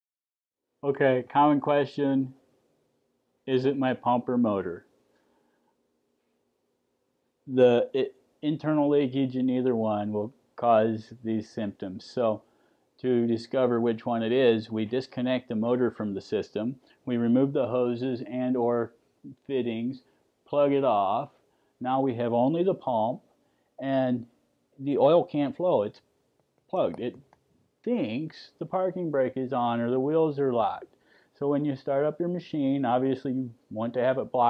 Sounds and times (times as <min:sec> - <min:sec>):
Speech: 0:00.8 - 0:02.4, 0:03.5 - 0:04.8, 0:07.5 - 0:12.4, 0:13.0 - 0:23.2, 0:23.8 - 0:26.0, 0:26.7 - 0:27.2, 0:27.9 - 0:34.5.